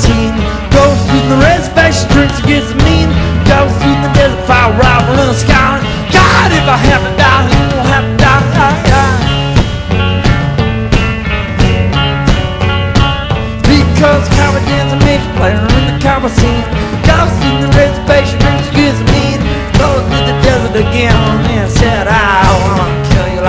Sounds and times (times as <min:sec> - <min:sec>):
Music: 0:00.0 - 0:23.4.